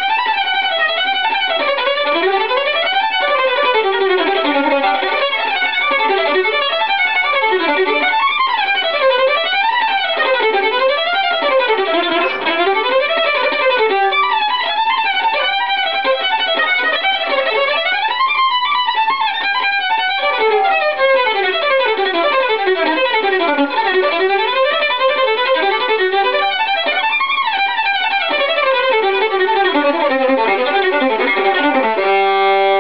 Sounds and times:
Violin, fiddle: 0:00.0 - 0:32.8.

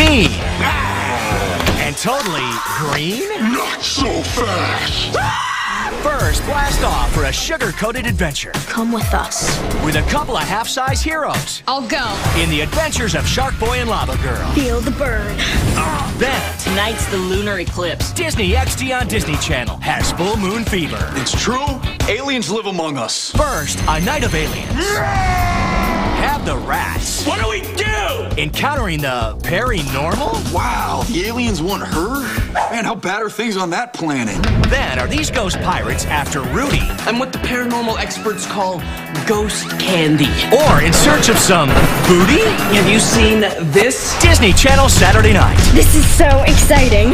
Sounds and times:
Music: 0:00.0 - 0:47.1
Speech: 0:01.7 - 0:05.2, 0:05.8 - 0:25.0, 0:26.2 - 0:47.1.

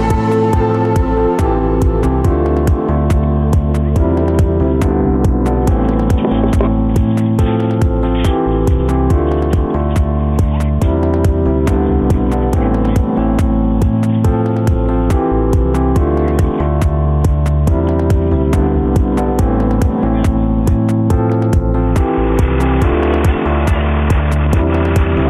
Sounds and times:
Music: 0:00.0 - 0:25.3.

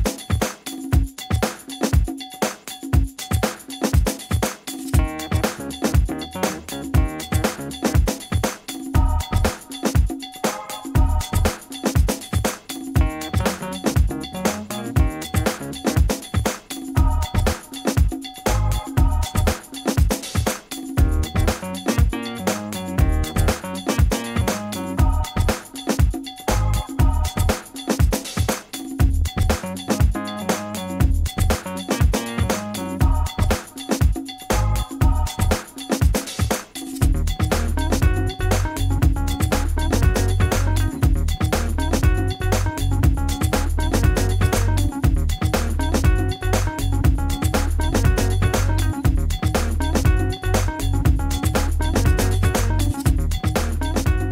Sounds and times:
Music: 0:00.0 - 0:54.3.

